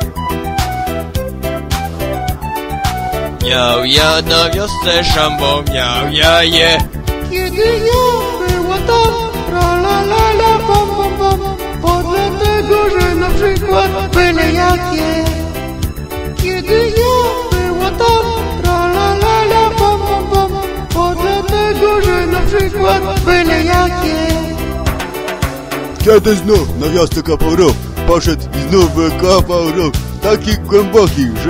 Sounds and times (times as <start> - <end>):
Music: 0.0 - 31.5.